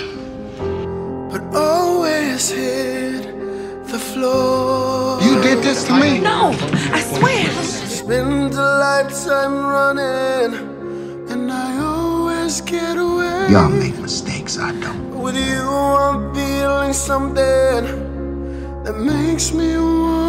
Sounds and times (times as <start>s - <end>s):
Music: 0.0s - 20.2s
Speech: 5.2s - 8.1s, 13.5s - 15.6s.